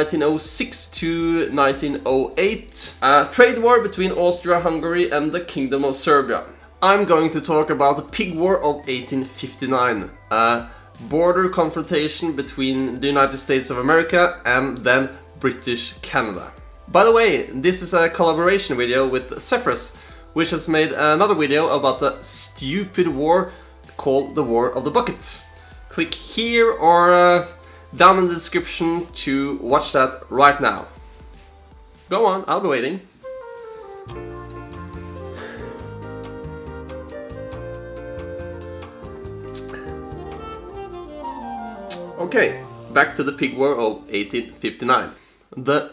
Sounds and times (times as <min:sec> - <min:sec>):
Speech: 0:00.0 - 0:31.0, 0:32.1 - 0:33.1, 0:42.2 - 0:45.9
Music: 0:00.0 - 0:45.9.